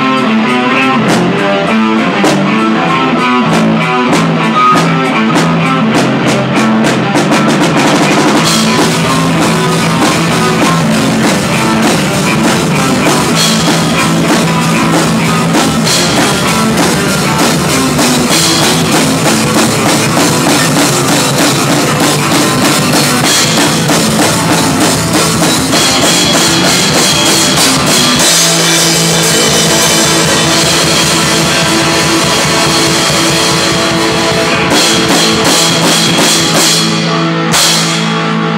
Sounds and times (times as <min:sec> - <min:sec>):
Heavy metal: 0:00.0 - 0:38.5.